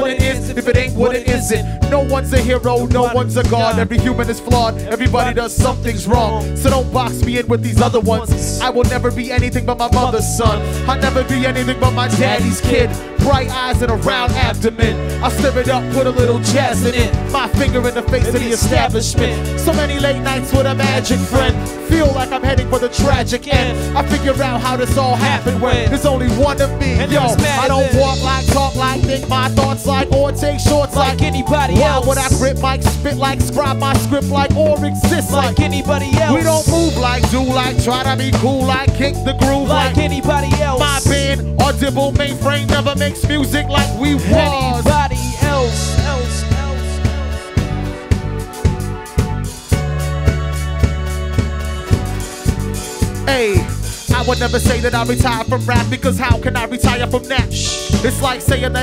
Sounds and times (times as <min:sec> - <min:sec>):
Singing: 0:00.0 - 0:47.0
Music: 0:00.0 - 0:58.8.